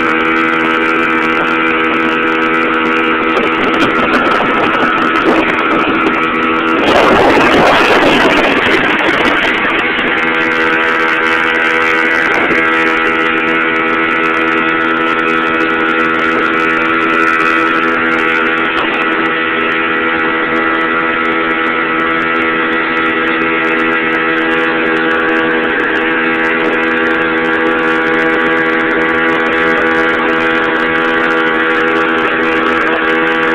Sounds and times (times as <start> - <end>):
Vehicle: 0.0 - 33.5.